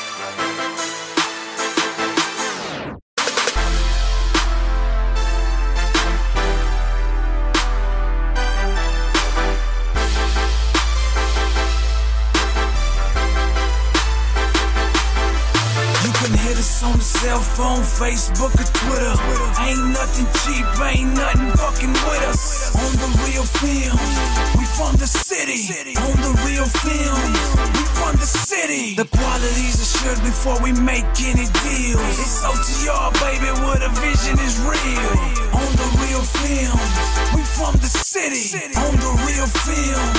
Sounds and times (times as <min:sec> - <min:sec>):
Music: 0:00.0 - 0:40.1.